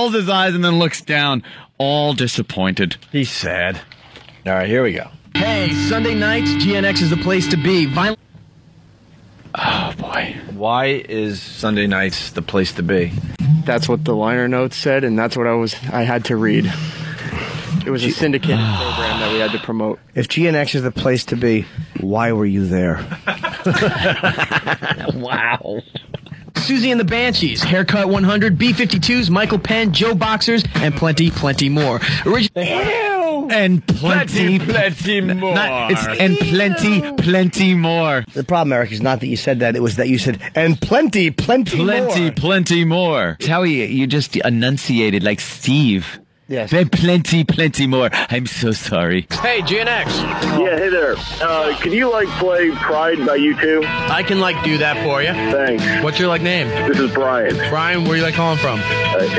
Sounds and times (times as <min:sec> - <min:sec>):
Speech: 0:00.0 - 0:03.8, 0:04.5 - 0:08.2, 0:09.6 - 0:16.8, 0:17.8 - 0:24.0, 0:25.0 - 0:59.3.